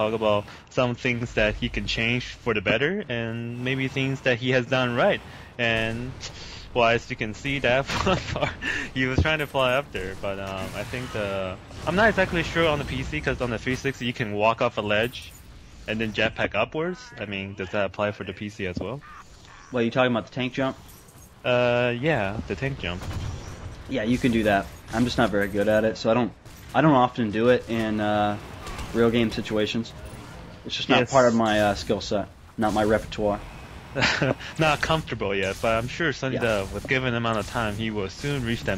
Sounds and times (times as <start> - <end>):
Speech: 0.0 - 6.2, 9.0 - 15.3, 15.9 - 19.0, 19.7 - 20.8, 23.9 - 28.4, 29.0 - 29.9, 30.7 - 33.4, 34.6 - 38.7.